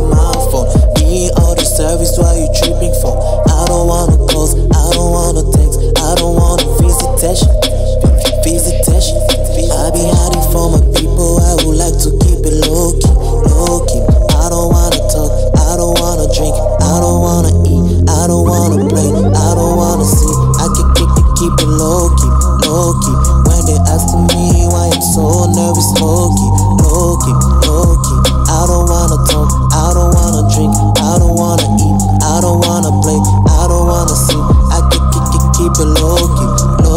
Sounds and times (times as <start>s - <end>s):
Pop music: 0.0s - 36.9s.